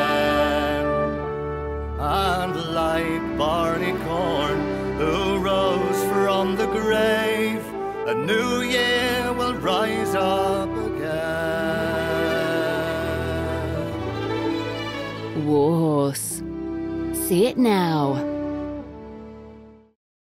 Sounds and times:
Music: 0.0s - 20.0s
Speech: 15.4s - 16.4s, 17.2s - 18.2s.

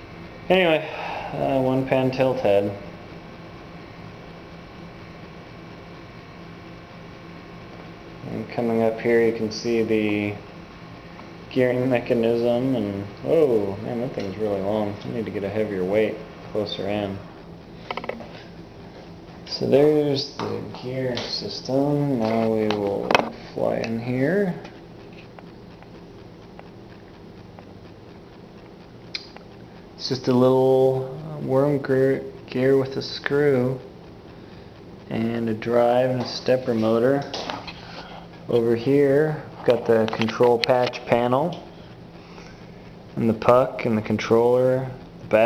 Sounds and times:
Speech: 0.5s - 2.9s, 8.2s - 10.4s, 11.5s - 17.3s, 19.5s - 24.7s, 30.0s - 33.9s, 35.1s - 37.6s, 38.5s - 41.7s, 43.2s - 45.4s.

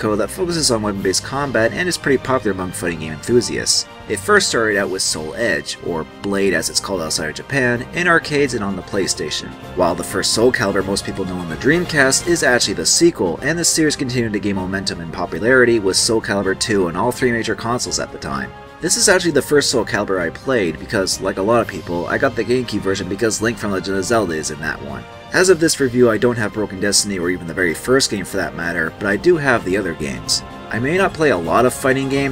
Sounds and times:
Music: 0.0s - 32.3s
Speech: 0.0s - 32.3s.

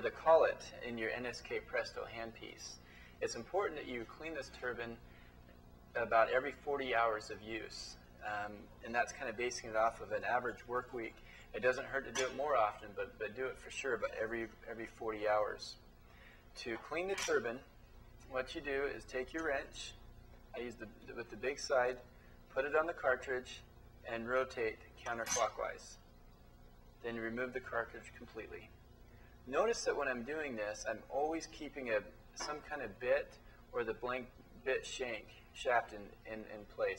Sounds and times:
Speech: 0.0s - 5.0s, 5.9s - 15.8s, 16.6s - 26.0s, 27.0s - 28.8s, 29.5s - 36.9s.

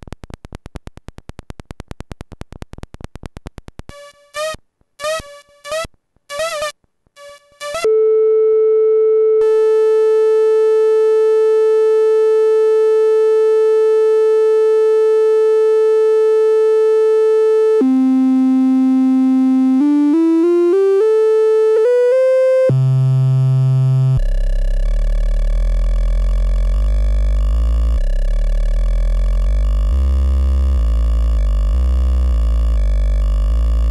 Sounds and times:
Inside, small room: 0.0s - 33.9s.

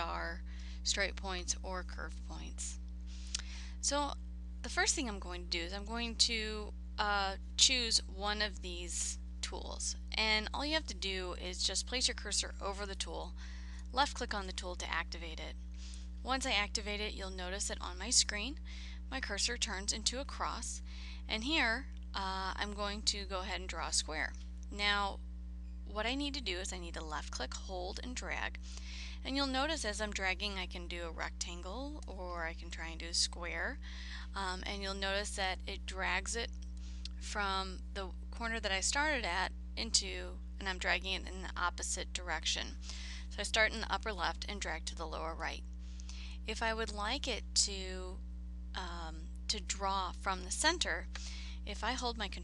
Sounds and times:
Speech: 0.0s - 2.8s, 3.4s - 15.5s, 16.2s - 25.2s, 25.9s - 36.5s, 37.1s - 45.6s, 46.4s - 48.2s, 48.8s - 52.4s.

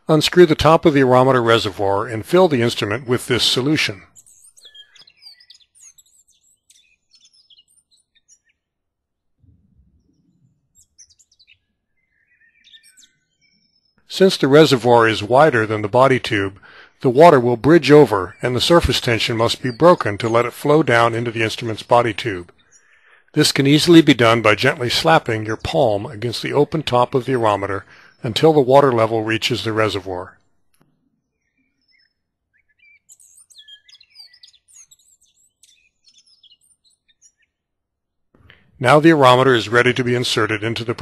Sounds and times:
Speech: 0.1s - 4.1s, 14.1s - 22.5s, 23.4s - 30.4s, 38.8s - 41.0s.

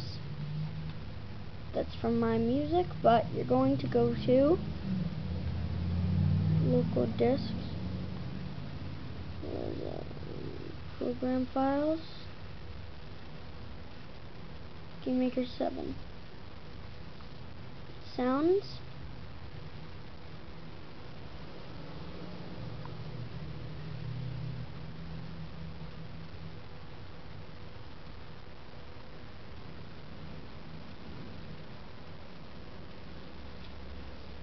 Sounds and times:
Speech: 0.0s - 0.2s, 1.8s - 4.6s, 6.6s - 7.8s, 9.4s - 12.3s, 15.0s - 16.0s, 18.0s - 18.8s.

